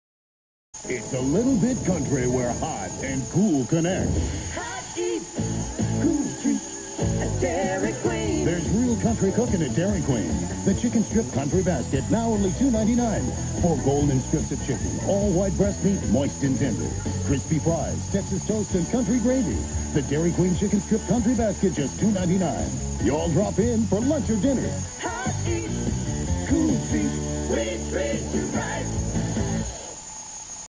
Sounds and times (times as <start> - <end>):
Music: 0.8 - 30.6
Speech: 0.9 - 4.2, 8.0 - 24.8.